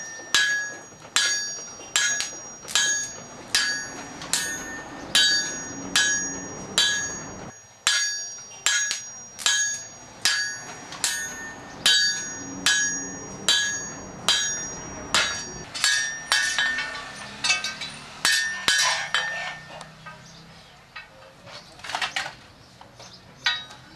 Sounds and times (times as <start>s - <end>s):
Tools: 0.0s - 20.3s.